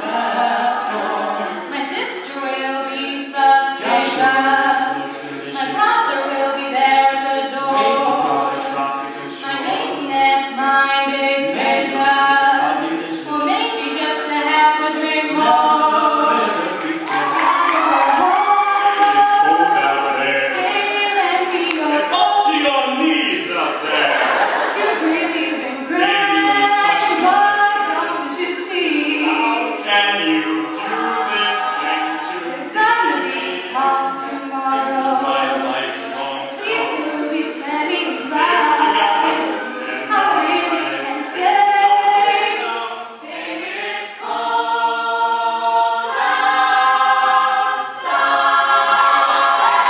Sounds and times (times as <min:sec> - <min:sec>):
Choir: 0:00.0 - 0:49.8.